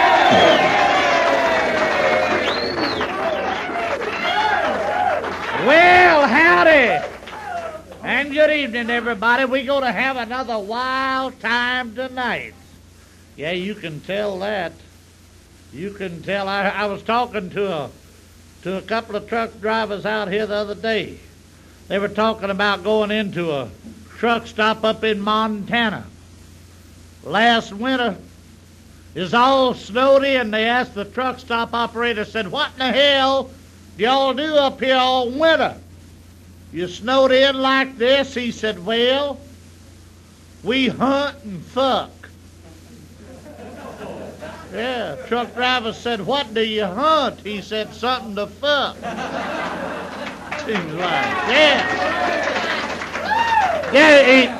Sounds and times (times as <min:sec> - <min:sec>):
Speech: 0:05.6 - 0:07.1, 0:08.0 - 0:12.8, 0:13.4 - 0:14.9, 0:15.7 - 0:18.0, 0:18.6 - 0:21.3, 0:21.9 - 0:26.1, 0:27.2 - 0:28.3, 0:29.2 - 0:35.8, 0:36.7 - 0:39.5, 0:40.6 - 0:43.1, 0:44.6 - 0:49.0, 0:50.5 - 0:52.2, 0:54.0 - 0:54.5.